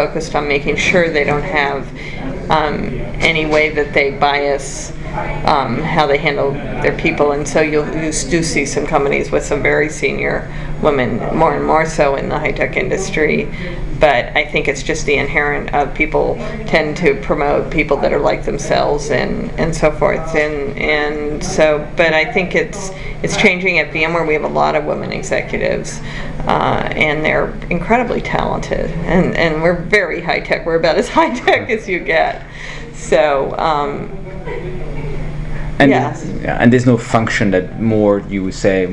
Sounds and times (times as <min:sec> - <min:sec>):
Speech: 0:00.0 - 0:35.1, 0:35.8 - 0:38.9.